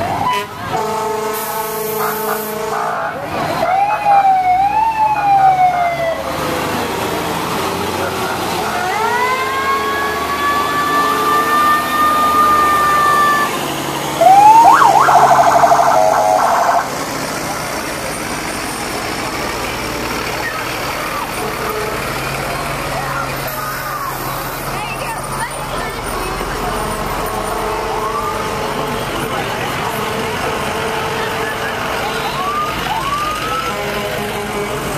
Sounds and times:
Outside, urban or manmade: 0.0s - 34.9s.

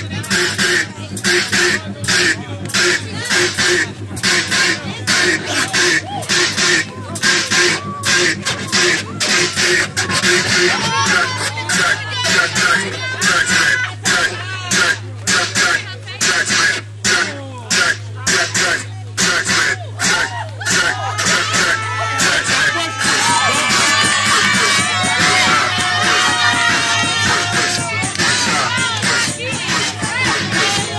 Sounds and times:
Music: 0.0s - 30.9s
Speech: 0.0s - 30.9s.

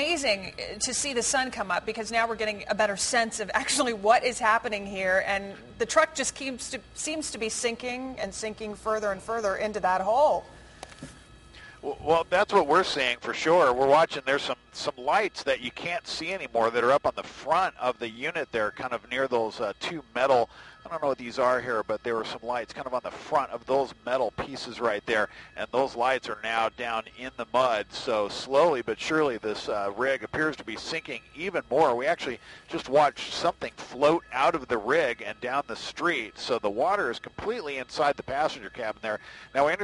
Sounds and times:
Speech: 11.8s - 39.8s.

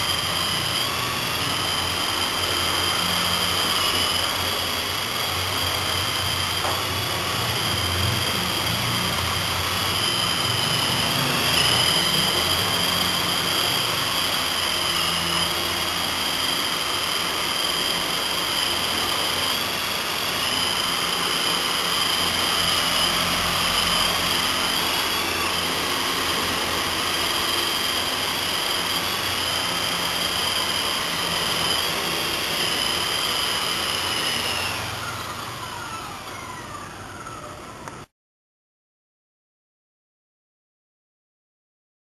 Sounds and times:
Helicopter: 0.0s - 38.1s.

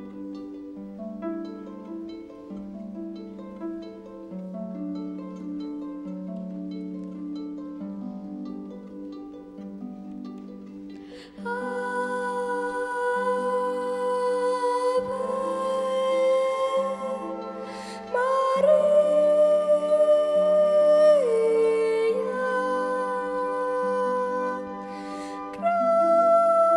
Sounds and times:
Orchestra: 0.0s - 26.7s.

